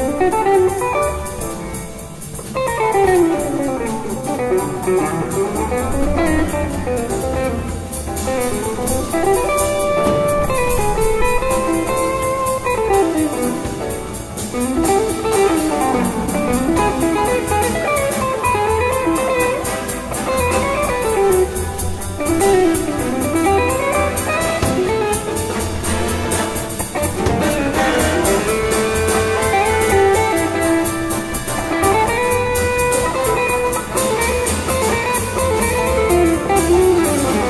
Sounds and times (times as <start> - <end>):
Guitar: 0.0 - 37.5
Orchestra: 0.0 - 37.5.